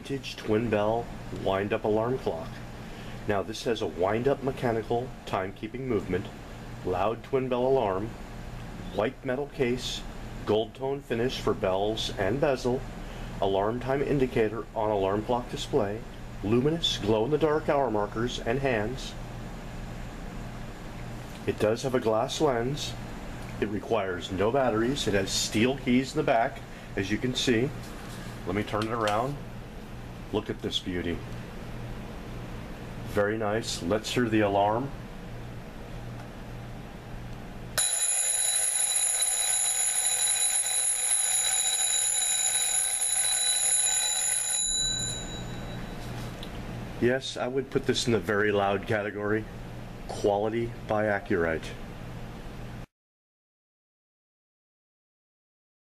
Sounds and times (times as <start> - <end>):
Speech: 0.0 - 2.7, 3.3 - 8.2, 8.8 - 19.2, 21.4 - 23.0, 23.6 - 27.8, 28.4 - 29.4, 30.3 - 31.3, 33.1 - 35.0, 47.0 - 49.5, 50.1 - 51.8.